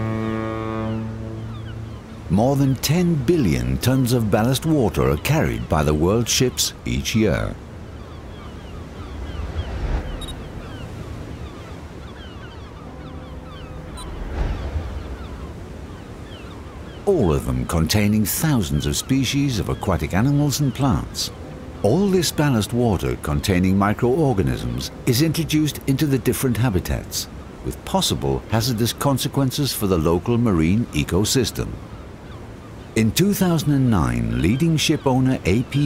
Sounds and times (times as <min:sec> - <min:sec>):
Speech: 0:02.3 - 0:07.6, 0:17.1 - 0:31.8, 0:33.0 - 0:35.8.